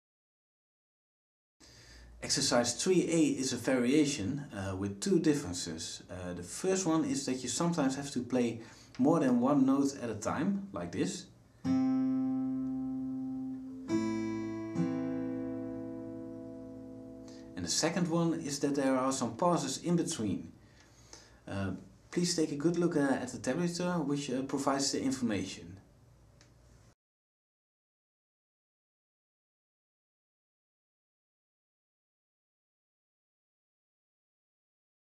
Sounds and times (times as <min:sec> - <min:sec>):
Speech: 0:02.2 - 0:11.4, 0:17.6 - 0:20.6, 0:21.5 - 0:25.8
Strum: 0:11.6 - 0:18.4
Acoustic guitar: 0:11.6 - 0:18.7.